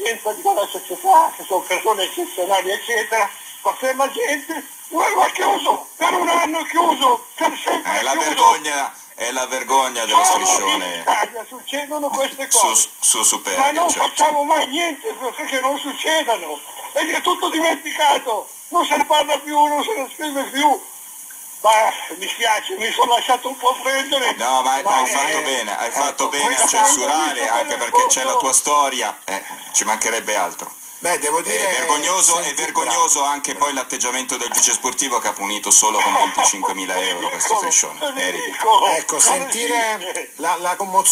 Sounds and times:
Speech: 0.0 - 20.8, 21.6 - 41.1.

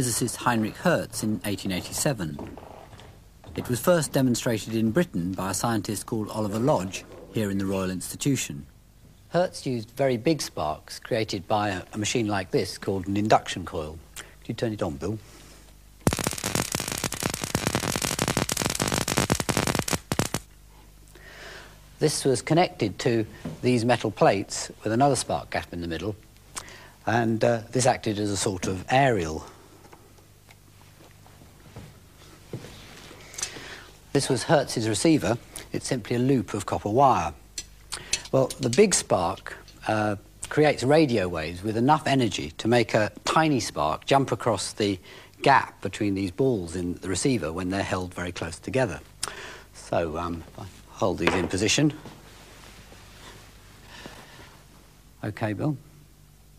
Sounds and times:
Speech: 0.0 - 2.5, 3.6 - 8.7, 9.3 - 15.2, 22.0 - 26.2, 27.0 - 29.6, 34.1 - 37.4, 38.3 - 49.1, 49.8 - 52.0, 55.2 - 55.9.

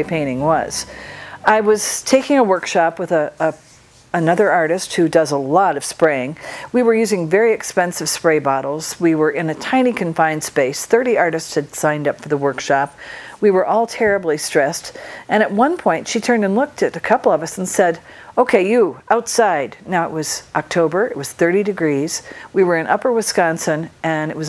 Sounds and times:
Speech: 0.0 - 3.6, 4.2 - 24.4.

